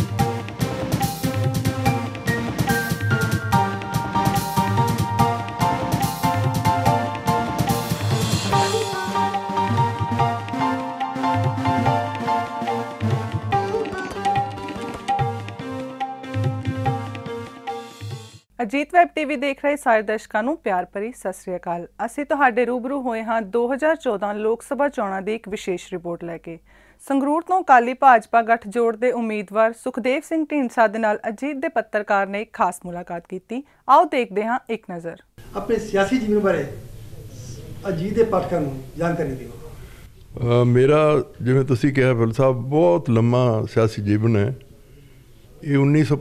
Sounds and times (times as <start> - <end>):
Sitar: 13.0 - 15.8
Speech: 18.6 - 39.8, 40.4 - 44.6, 45.6 - 46.2.